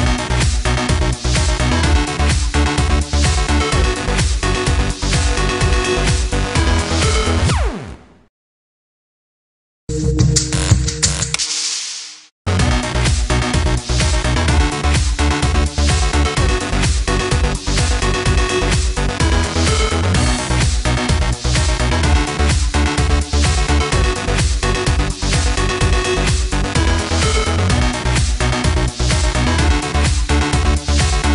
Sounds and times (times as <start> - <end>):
Music: 0.0 - 8.3, 9.9 - 31.3.